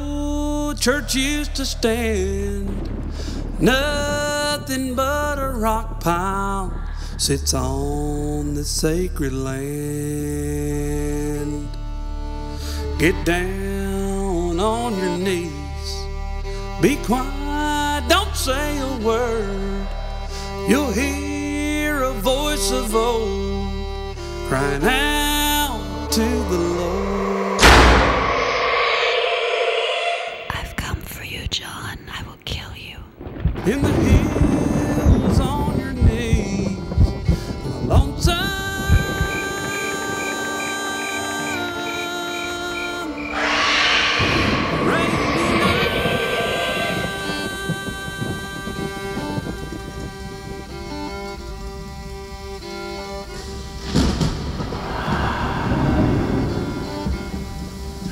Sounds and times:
Music: 0:00.0 - 0:28.6, 0:34.2 - 0:45.6, 0:47.0 - 0:58.1.

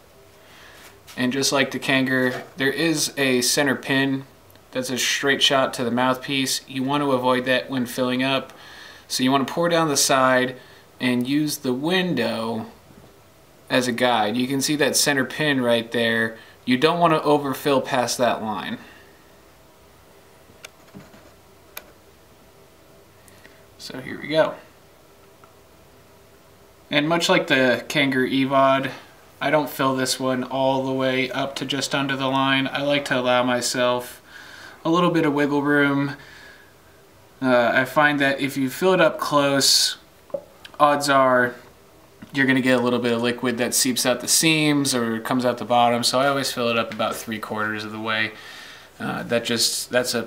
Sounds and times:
Speech: 0:01.2 - 0:08.5, 0:09.1 - 0:12.8, 0:13.7 - 0:18.9, 0:23.8 - 0:24.7, 0:26.9 - 0:34.2, 0:34.8 - 0:36.2, 0:37.4 - 0:40.1, 0:40.7 - 0:48.4, 0:49.0 - 0:50.2.

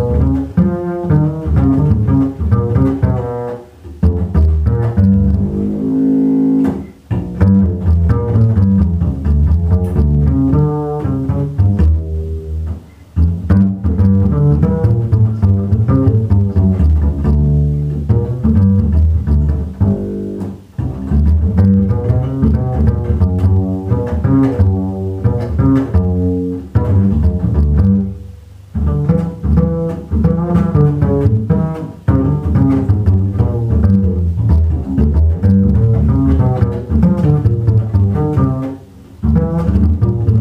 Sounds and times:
Double bass: 0:00.0 - 0:40.4
Pizzicato: 0:00.0 - 0:40.4.

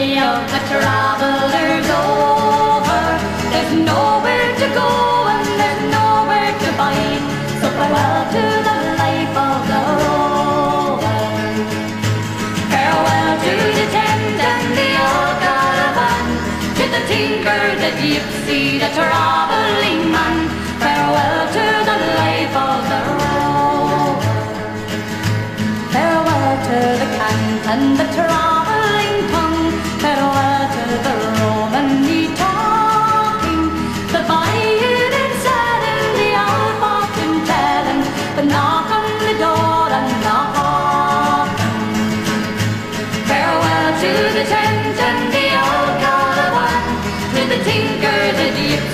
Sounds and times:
Folk music: 0:00.0 - 0:48.9.

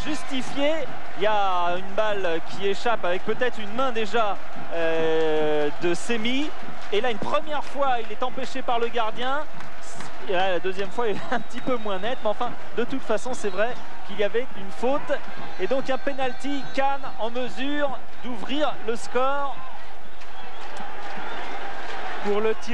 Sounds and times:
Speech: 0:00.0 - 0:19.6, 0:22.2 - 0:22.7.

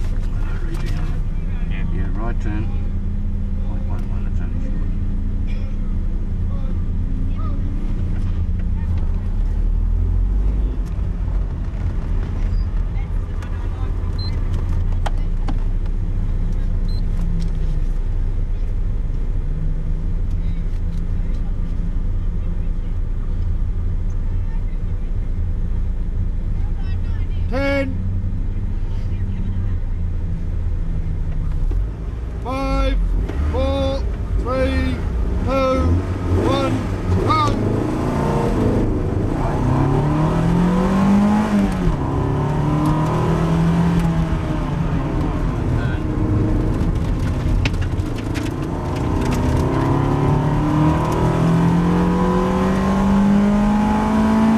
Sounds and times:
Car: 0:00.0 - 0:54.5.

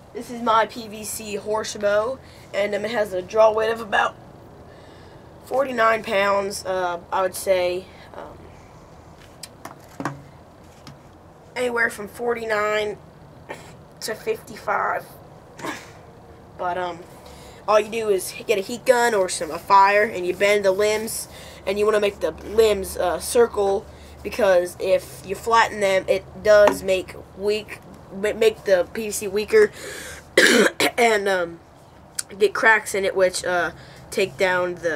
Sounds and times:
Speech: 0:00.2 - 0:04.2, 0:05.5 - 0:08.4, 0:11.6 - 0:13.0, 0:14.0 - 0:15.2, 0:16.6 - 0:17.1, 0:17.7 - 0:29.8, 0:30.9 - 0:31.6, 0:32.2 - 0:34.9.

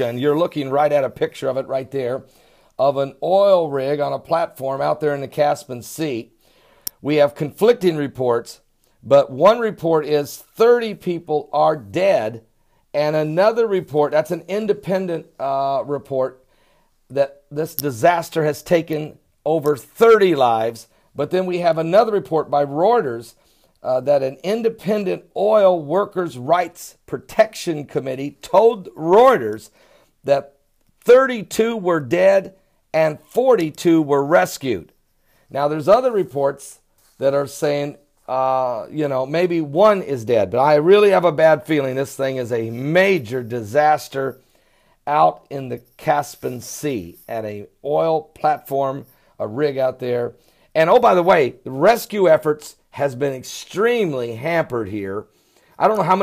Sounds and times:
Speech: 0:00.0 - 0:06.3, 0:07.0 - 0:12.4, 0:13.0 - 0:16.4, 0:17.1 - 0:29.7, 0:30.3 - 0:34.9, 0:35.5 - 0:44.4, 0:45.1 - 0:56.2.

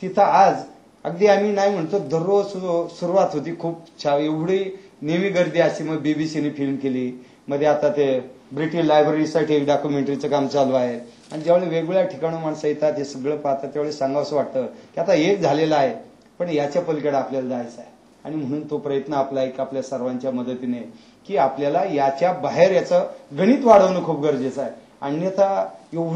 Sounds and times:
Male speech, man speaking: 0:00.0 - 0:26.1.

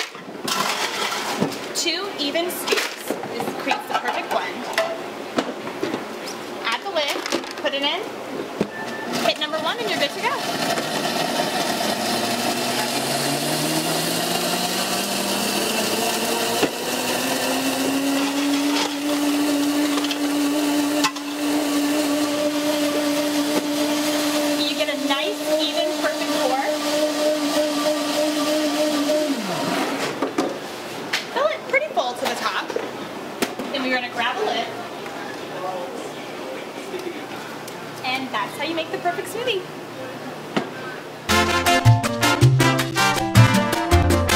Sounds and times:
Blender: 0:09.2 - 0:30.2.

